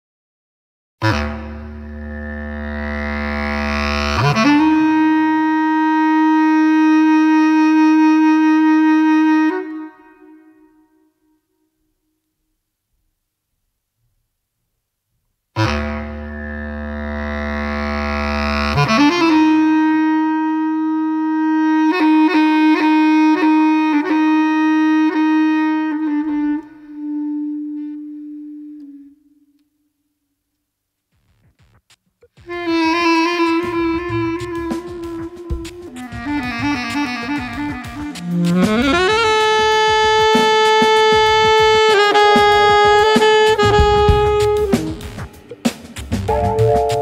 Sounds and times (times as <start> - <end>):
Didgeridoo: 1.0 - 7.8, 15.6 - 21.7, 31.5 - 47.0.